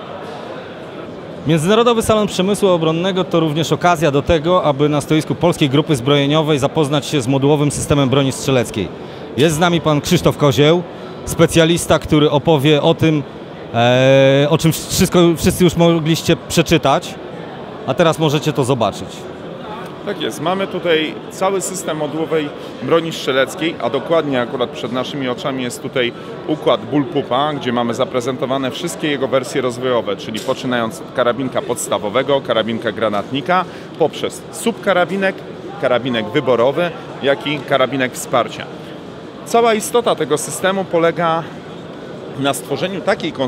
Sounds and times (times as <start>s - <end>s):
Speech: 1.4s - 17.2s, 17.9s - 38.7s, 39.4s - 41.5s, 42.4s - 43.4s.